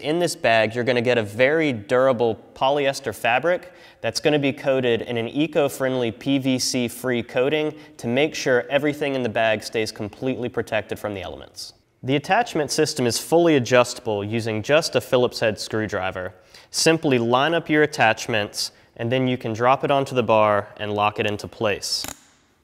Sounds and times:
Speech: 0.0 - 22.1.

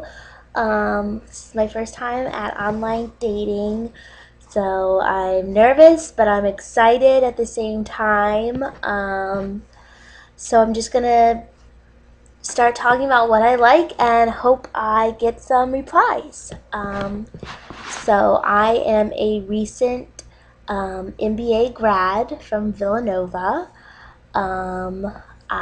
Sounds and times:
Speech: 0.0 - 9.7, 10.4 - 11.5, 12.4 - 23.8, 24.4 - 25.6.

